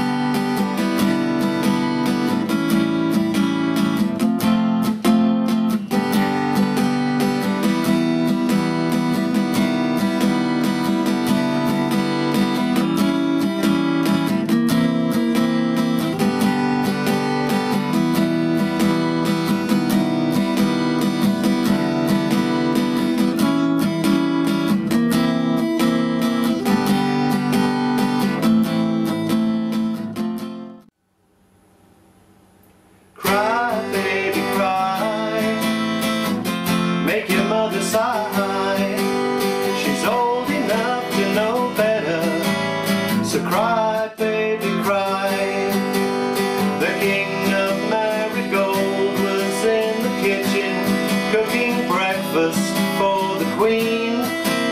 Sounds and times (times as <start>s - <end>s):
Guitar: 0.0s - 31.0s, 31.6s - 54.7s.